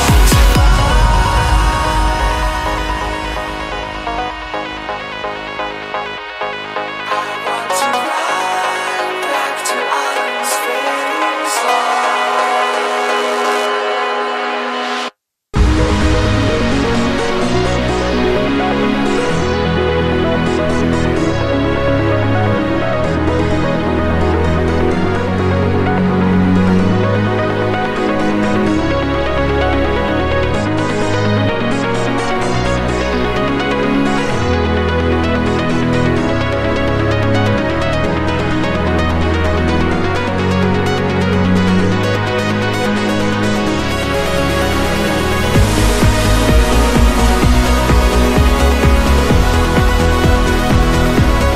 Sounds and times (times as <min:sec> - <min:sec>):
Music: 0:00.0 - 0:51.5.